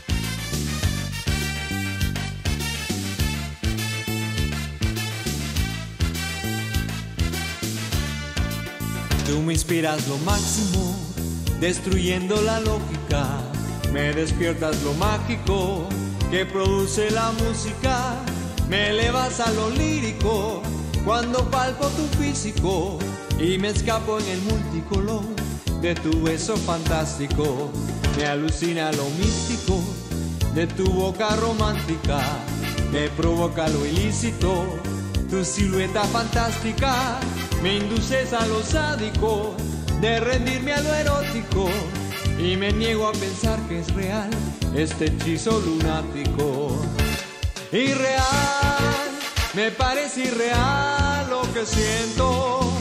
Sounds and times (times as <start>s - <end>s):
Flamenco: 0.0s - 52.8s.